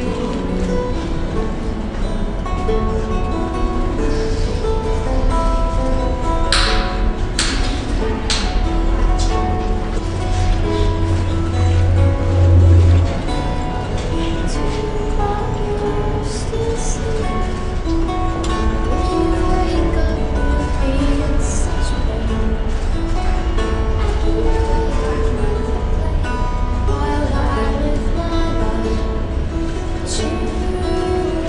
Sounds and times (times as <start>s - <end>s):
Music: 0.0s - 31.4s.